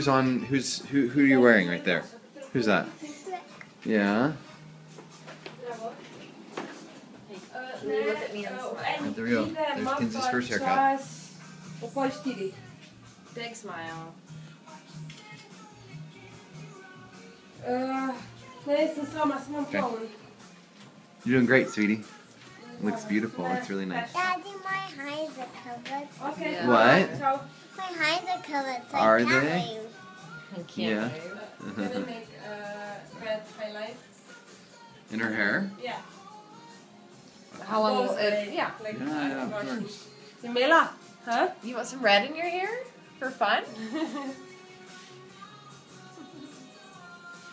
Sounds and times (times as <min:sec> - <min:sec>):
Music: 0:00.0 - 0:47.5
Child speech, kid speaking: 0:03.0 - 0:03.6, 0:24.1 - 0:26.3, 0:27.7 - 0:30.0.